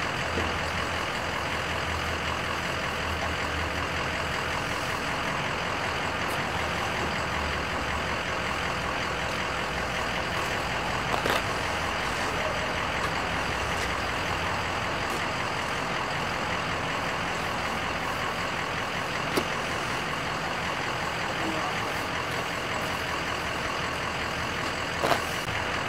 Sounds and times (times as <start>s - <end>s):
Car: 0.0s - 25.8s.